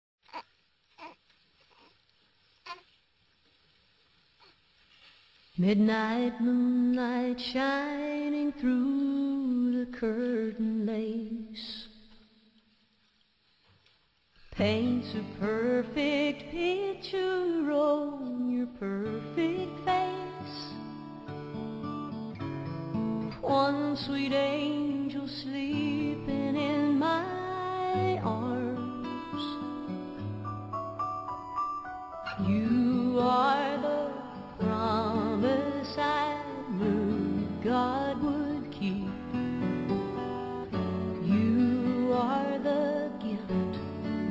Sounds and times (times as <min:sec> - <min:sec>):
Lullaby: 0:05.6 - 0:11.9, 0:14.6 - 0:21.1, 0:23.0 - 0:44.3.